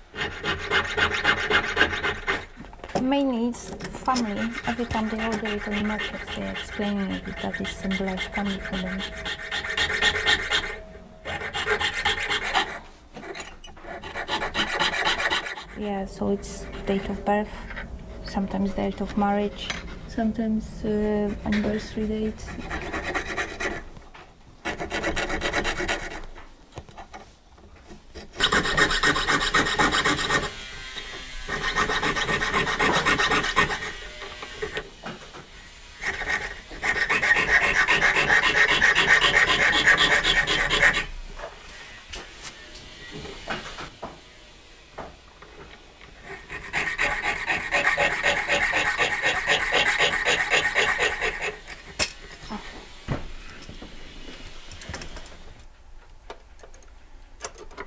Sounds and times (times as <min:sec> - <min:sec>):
Speech: 0:02.9 - 0:09.0, 0:15.8 - 0:17.7, 0:18.3 - 0:22.5.